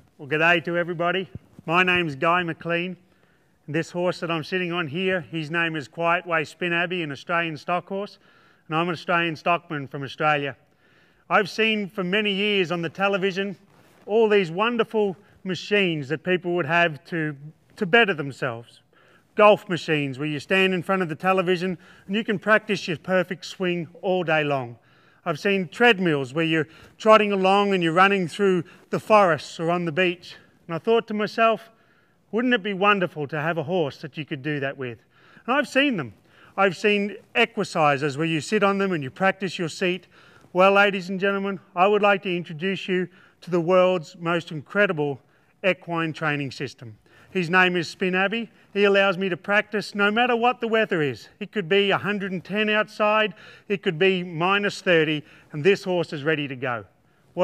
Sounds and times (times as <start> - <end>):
Speech: 0.0 - 3.0, 3.7 - 10.6, 11.3 - 18.8, 19.4 - 57.4.